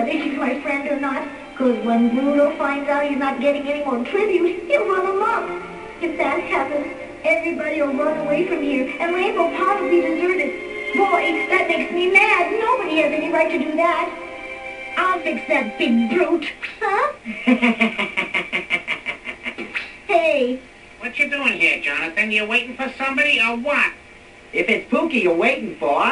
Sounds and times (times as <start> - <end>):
Music: 0.0 - 18.6.